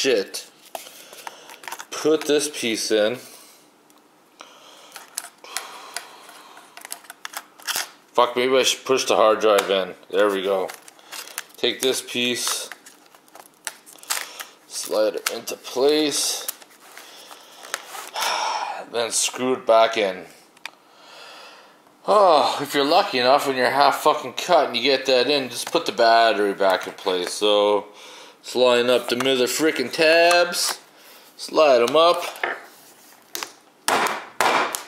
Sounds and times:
Speech: 0.0s - 0.5s, 1.9s - 3.3s, 8.2s - 10.8s, 11.6s - 12.7s, 14.7s - 16.5s, 18.8s - 20.4s, 22.0s - 30.8s, 31.4s - 32.4s
Inside, small room: 0.0s - 34.8s.

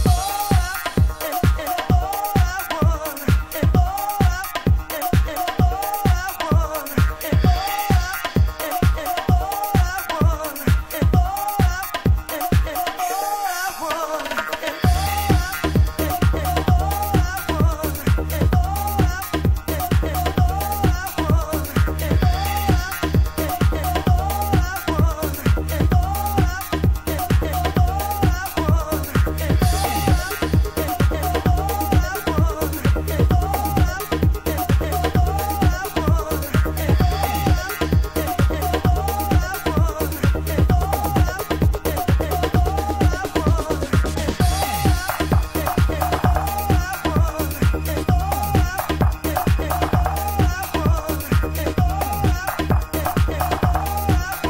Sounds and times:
Disco: 0.0s - 54.4s
Electronic music: 0.0s - 54.4s.

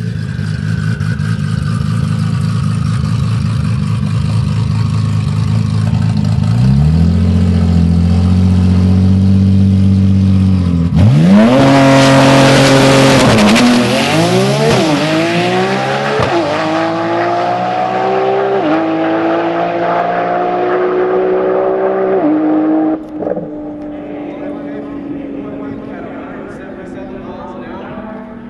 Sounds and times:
Race car, auto racing: 0.0s - 28.5s.

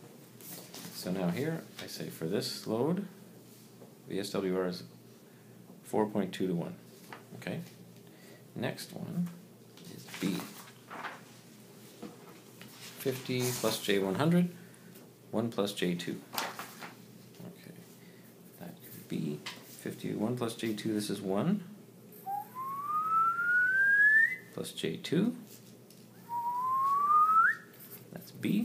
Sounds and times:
Inside, small room: 0.0s - 28.6s
Speech: 0.9s - 3.2s, 4.1s - 4.9s, 5.8s - 6.8s, 7.4s - 7.8s, 8.6s - 10.6s, 13.0s - 14.6s, 15.3s - 16.3s, 18.6s - 21.8s, 24.5s - 25.5s, 28.1s - 28.6s.

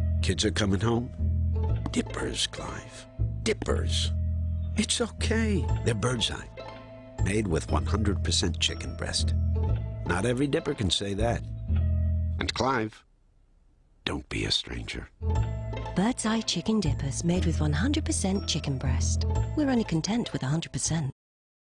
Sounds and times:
Music: 0.0s - 12.9s, 15.0s - 21.2s
Speech: 7.2s - 9.3s, 10.1s - 11.4s, 12.4s - 13.0s, 14.0s - 15.1s.

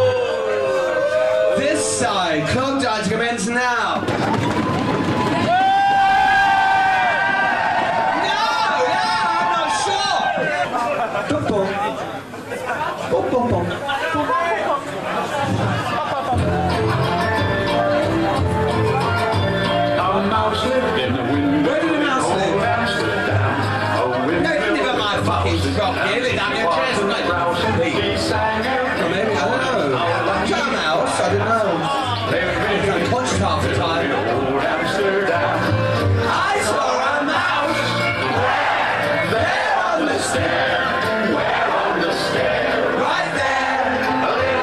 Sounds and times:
Speech: 1.6s - 4.1s, 20.0s - 23.0s, 24.0s - 35.3s.

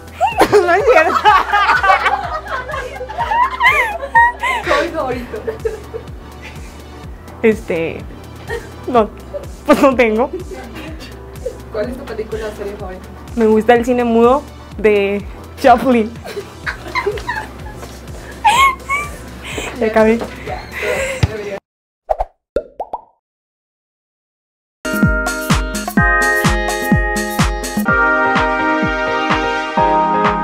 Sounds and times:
Music: 0.0s - 21.6s, 24.9s - 30.4s
Female speech, woman speaking: 0.4s - 1.3s, 4.7s - 5.5s, 7.4s - 8.1s, 8.9s - 9.1s, 9.7s - 11.0s, 11.7s - 16.2s, 19.7s - 21.6s
Plop: 22.1s - 23.2s.

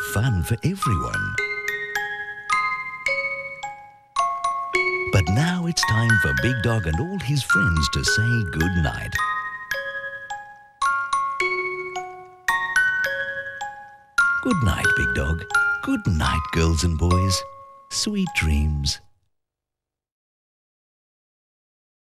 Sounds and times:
Speech: 0.0s - 1.4s, 5.1s - 9.2s, 14.4s - 19.1s
Music: 0.0s - 19.3s.

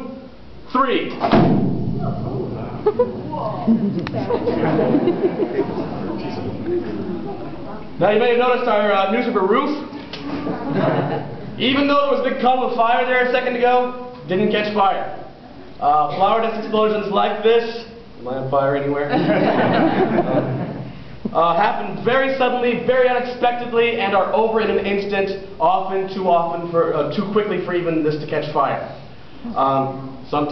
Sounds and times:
Speech: 0.0s - 1.2s, 6.1s - 9.9s, 11.6s - 15.2s, 21.4s - 30.5s.

